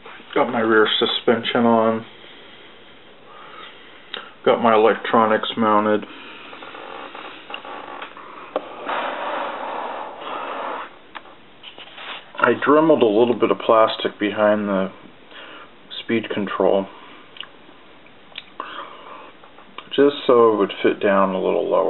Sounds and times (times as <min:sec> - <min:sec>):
Speech: 0:00.3 - 0:02.1, 0:04.4 - 0:06.1, 0:12.4 - 0:15.0, 0:15.9 - 0:17.0, 0:19.8 - 0:21.9.